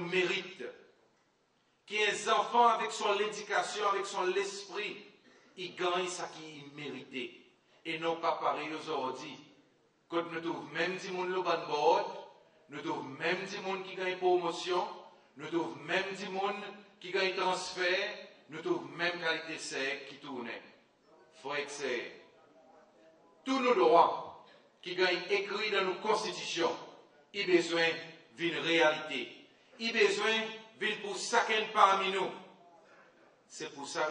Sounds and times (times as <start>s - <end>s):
Male speech, man speaking: 0.0s - 0.9s, 1.9s - 5.0s, 5.6s - 9.5s, 10.1s - 34.1s.